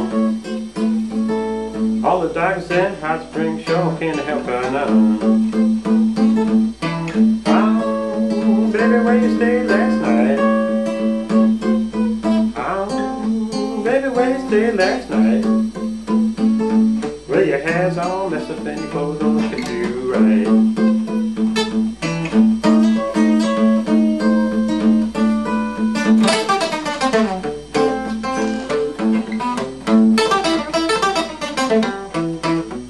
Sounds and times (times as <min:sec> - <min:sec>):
Blues: 0:00.0 - 0:32.8.